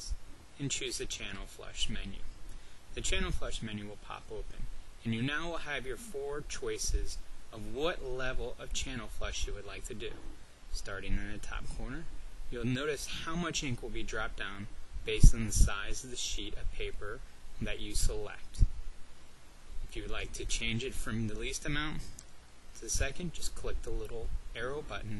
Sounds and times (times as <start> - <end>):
Speech: 0.0 - 2.3, 2.9 - 18.7, 19.8 - 22.2, 22.8 - 25.1.